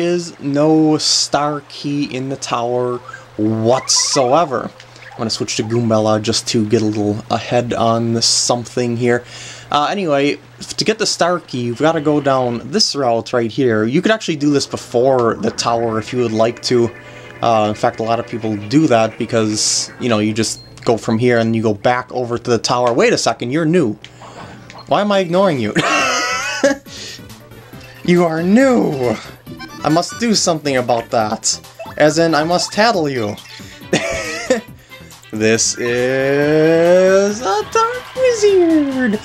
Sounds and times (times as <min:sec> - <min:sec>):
Speech: 0:00.0 - 0:24.0, 0:24.9 - 0:25.8, 0:28.1 - 0:33.4, 0:35.3 - 0:39.2
Music: 0:04.2 - 0:39.2.